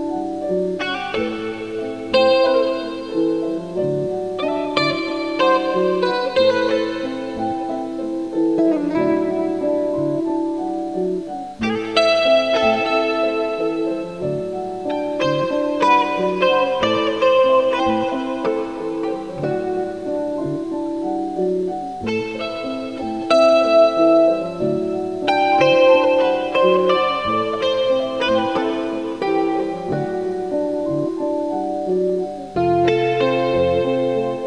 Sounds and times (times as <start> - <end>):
Music: 0.0 - 34.4.